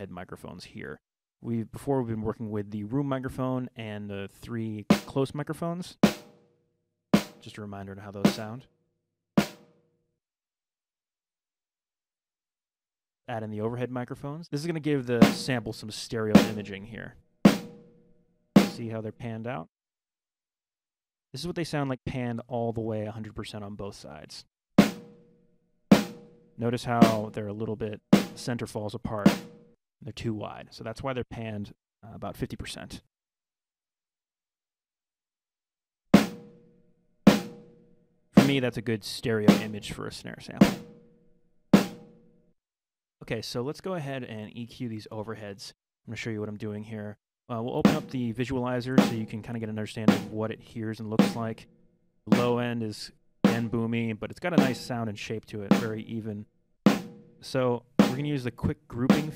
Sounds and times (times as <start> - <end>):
Speech: 0.0 - 6.0, 7.4 - 8.7, 13.3 - 17.2, 18.6 - 19.7, 21.4 - 24.5, 26.6 - 29.4, 30.0 - 33.1, 38.4 - 40.8, 43.2 - 51.6, 52.3 - 56.5, 57.4 - 59.3
Drum: 4.9 - 5.2, 6.0 - 6.4, 7.2 - 7.6, 8.3 - 8.5, 9.4 - 9.7, 15.2 - 16.8, 17.5 - 17.9, 18.6 - 19.0, 24.8 - 25.2, 26.0 - 27.4, 28.0 - 29.6, 36.2 - 36.6, 37.3 - 37.7, 38.4 - 38.7, 39.4 - 39.9, 40.6 - 41.0, 41.8 - 42.1, 47.8 - 48.4, 49.0 - 51.6, 52.3 - 52.8, 53.5 - 53.8, 54.5 - 55.1, 55.7 - 56.0, 56.9 - 59.3.